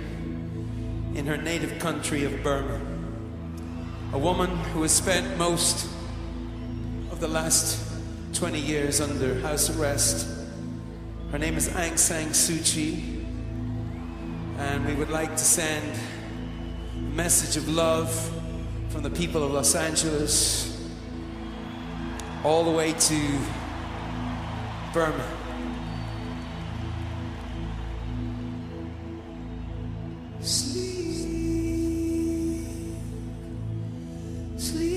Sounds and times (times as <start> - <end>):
Music: 0.0 - 34.9
Speech: 1.2 - 3.0, 4.2 - 5.9, 7.1 - 7.8, 8.4 - 10.4, 11.3 - 13.1, 14.6 - 16.2, 17.1 - 20.8, 22.4 - 23.6, 24.9 - 25.4.